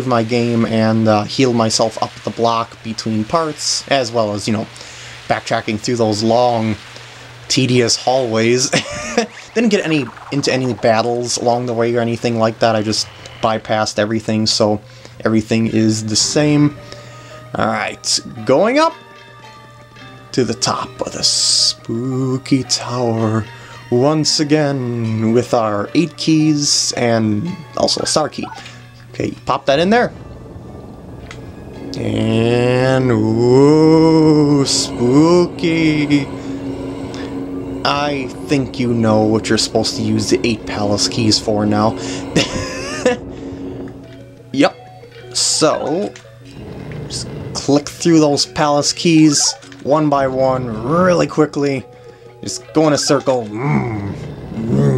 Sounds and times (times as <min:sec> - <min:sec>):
Speech: 0:00.0 - 0:06.8, 0:07.5 - 0:16.8, 0:17.5 - 0:19.0, 0:20.3 - 0:30.2, 0:31.9 - 0:36.3, 0:37.9 - 0:43.2, 0:44.6 - 0:44.8, 0:45.4 - 0:46.2, 0:47.1 - 0:54.9
Music: 0:00.0 - 0:54.9.